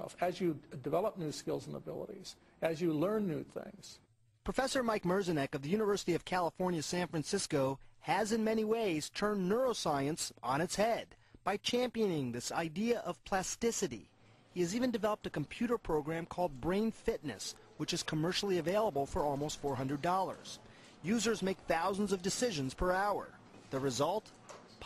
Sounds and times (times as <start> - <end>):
Speech: 0.0 - 24.8.